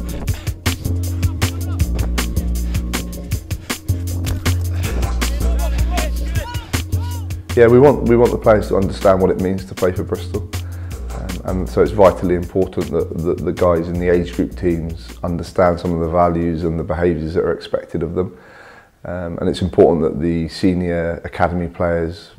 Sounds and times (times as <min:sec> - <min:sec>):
Music: 0:00.0 - 0:16.7
Speech: 0:07.6 - 0:10.5, 0:11.1 - 0:18.4, 0:19.1 - 0:22.3.